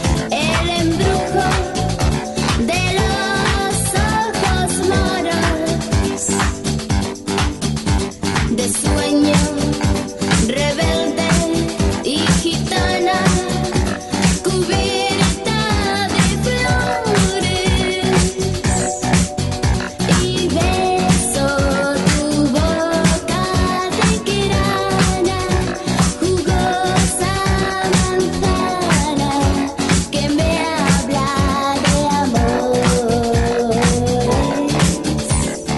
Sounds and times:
Music: 0.0 - 35.7.

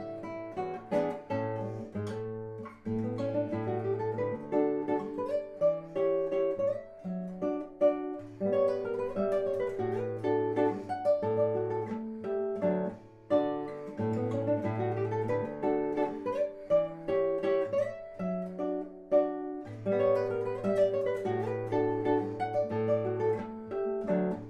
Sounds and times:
Acoustic guitar: 0.0 - 24.4.

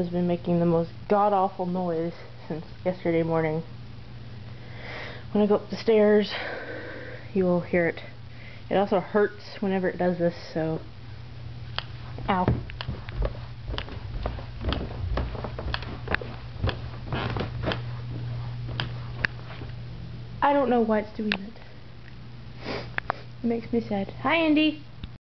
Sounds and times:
Speech: 0.0 - 3.7, 5.4 - 6.4, 8.7 - 10.9, 12.3 - 12.6, 20.4 - 21.6, 23.4 - 24.9.

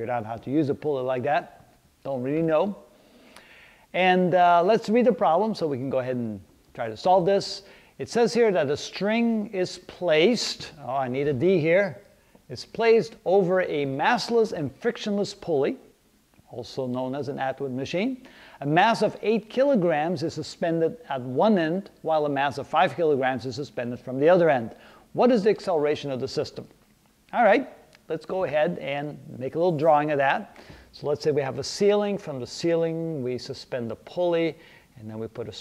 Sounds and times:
Speech: 0.0 - 2.9, 3.9 - 15.9, 16.5 - 35.6.

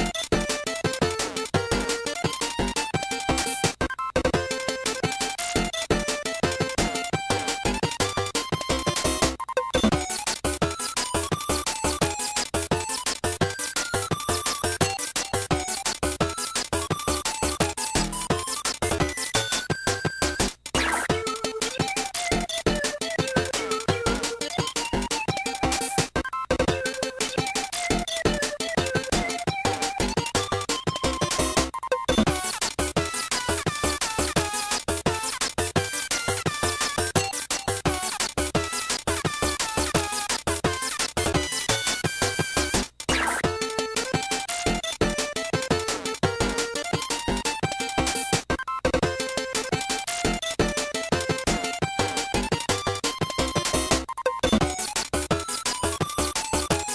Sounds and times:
Music: 0.0 - 56.9.

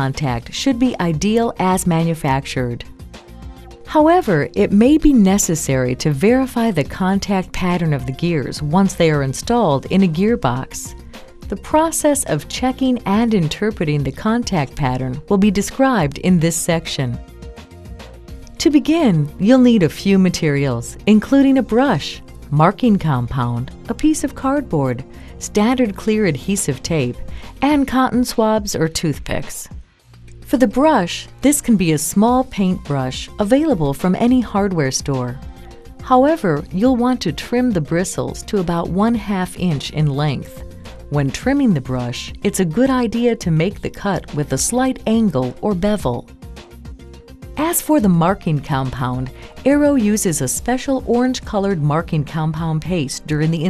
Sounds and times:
Speech: 0.0 - 2.9, 3.9 - 10.9, 11.5 - 17.2, 18.6 - 29.7, 30.5 - 35.4, 36.0 - 46.2, 47.6 - 53.6
Music: 0.0 - 53.6.

